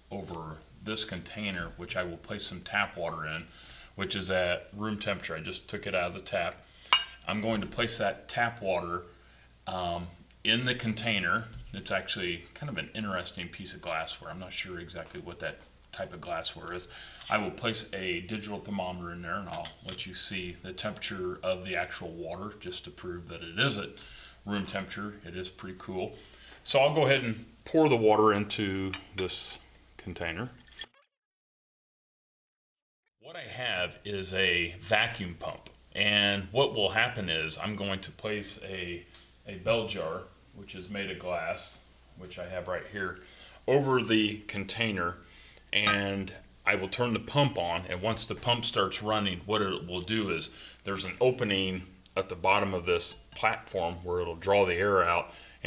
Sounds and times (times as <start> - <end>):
Speech: 0.0 - 6.6, 7.2 - 9.1, 9.7 - 30.6, 33.2 - 55.6.